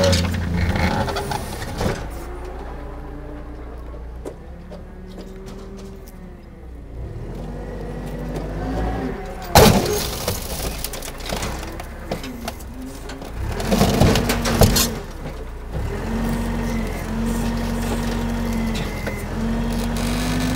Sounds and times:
Vehicle: 0.0s - 20.5s.

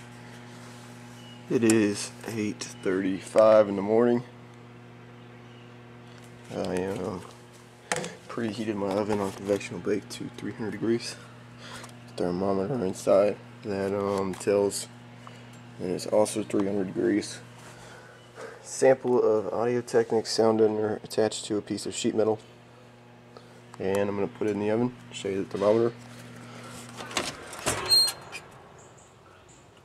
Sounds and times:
Speech: 1.5s - 4.3s, 6.5s - 7.3s, 8.3s - 11.2s, 12.2s - 14.9s, 15.8s - 17.4s, 18.7s - 22.4s, 23.8s - 26.0s.

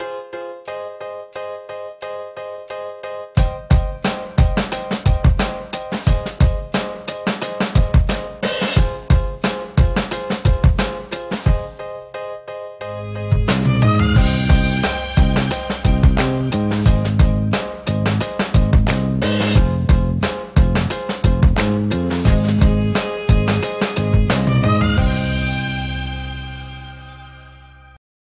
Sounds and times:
Music: 0.0s - 28.0s.

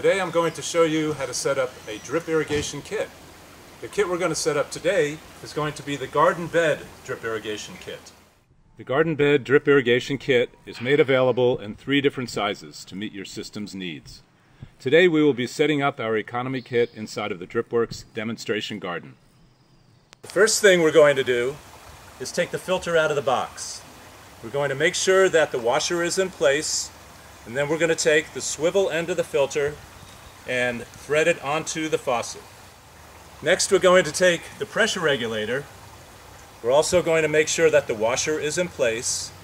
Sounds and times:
Speech: 0.0s - 3.2s, 3.8s - 8.2s, 8.8s - 19.2s, 20.3s - 21.6s, 22.2s - 26.9s, 27.5s - 29.8s, 30.5s - 32.5s, 33.4s - 35.7s, 36.6s - 39.4s.

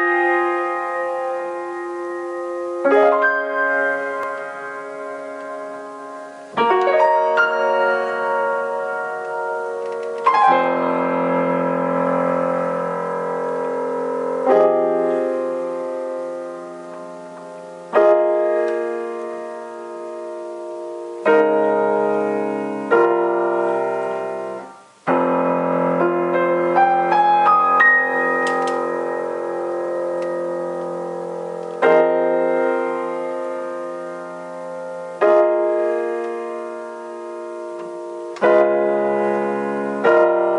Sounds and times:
Piano: 0.0s - 40.5s.

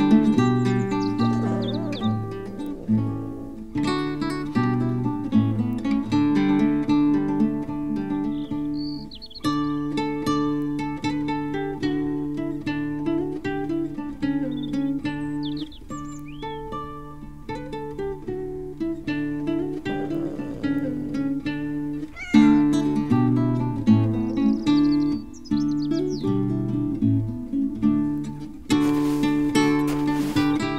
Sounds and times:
Music: 0.0s - 30.7s
Meow: 1.2s - 3.0s, 19.9s - 20.8s, 22.1s - 23.0s.

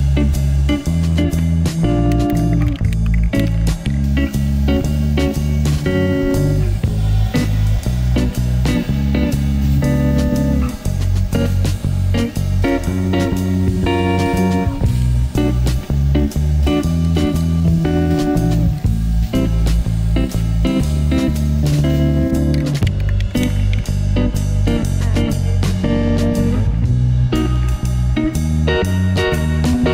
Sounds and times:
Music: 0.0s - 29.9s
Spray: 3.4s - 22.8s.

